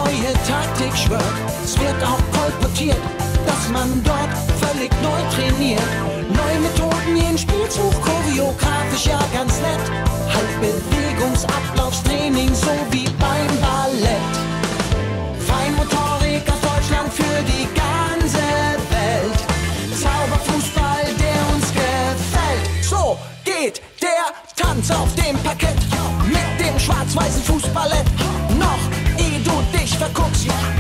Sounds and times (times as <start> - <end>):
Music: 0.0 - 30.8.